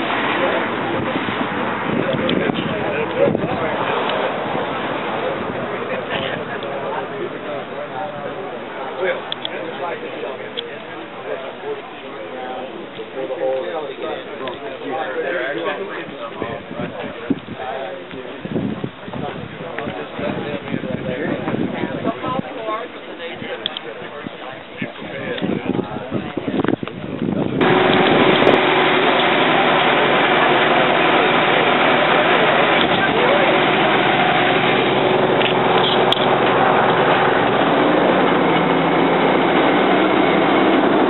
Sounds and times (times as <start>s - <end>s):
Bus: 0.0s - 24.2s, 26.2s - 41.0s
Speech: 0.0s - 28.5s, 29.1s - 36.7s.